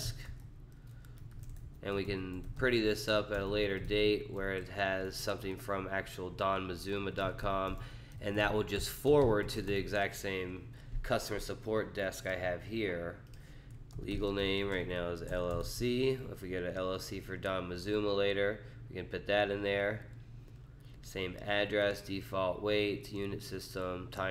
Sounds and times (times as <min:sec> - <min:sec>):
Speech: 0:01.8 - 0:13.2, 0:14.0 - 0:20.1, 0:21.1 - 0:24.3.